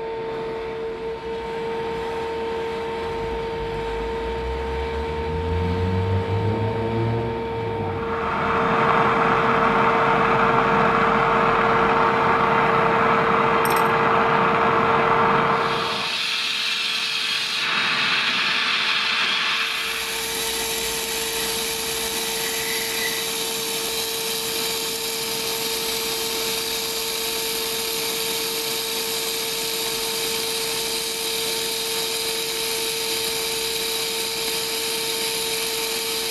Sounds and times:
Fire: 8.0s - 36.3s.

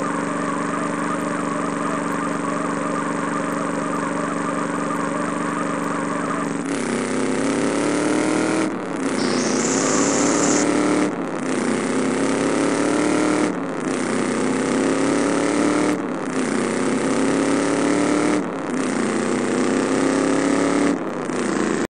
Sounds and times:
Car: 0.0s - 21.8s.

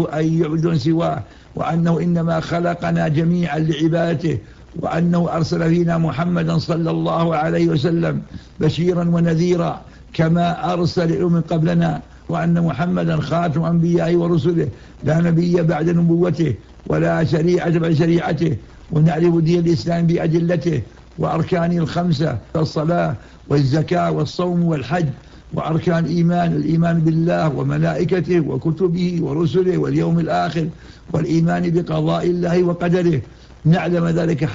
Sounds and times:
Speech: 0.0s - 34.5s.

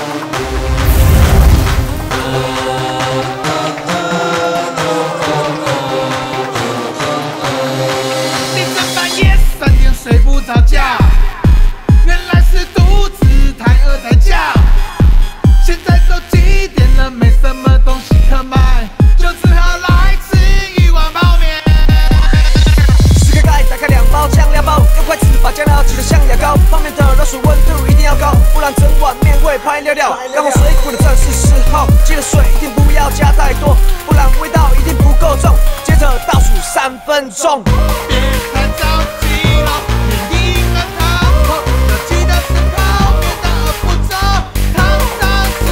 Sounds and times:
Pop music: 0.0s - 45.7s.

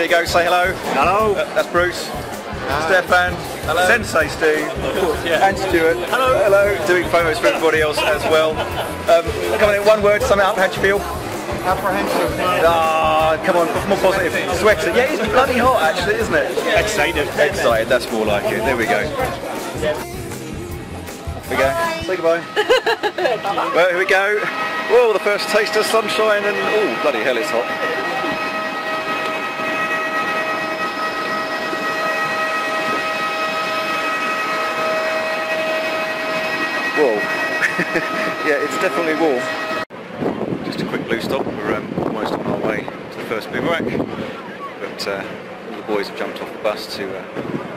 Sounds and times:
Music: 0.0s - 22.6s
Inside, public space: 0.0s - 47.7s.

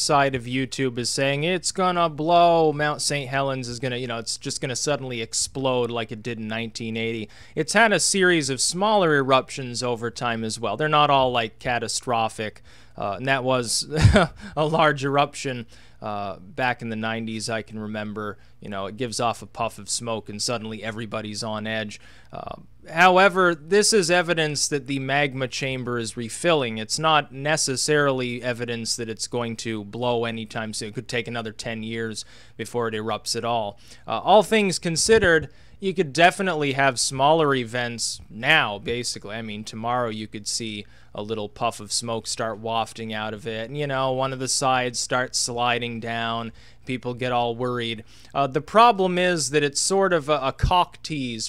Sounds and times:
Speech: 0.0s - 51.4s.

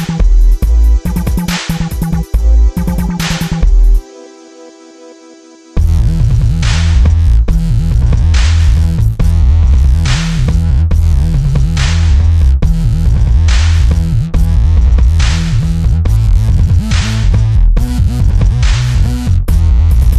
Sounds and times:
Dubstep: 0.0s - 20.1s.

